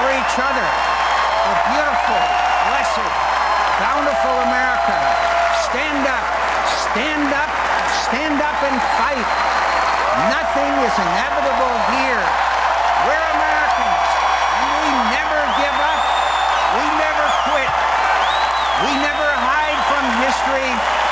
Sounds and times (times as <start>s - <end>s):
Male speech, man speaking: 0.0s - 0.8s, 1.4s - 3.2s, 3.8s - 9.4s, 10.1s - 12.4s, 13.0s - 16.1s, 16.7s - 17.8s, 18.8s - 20.8s.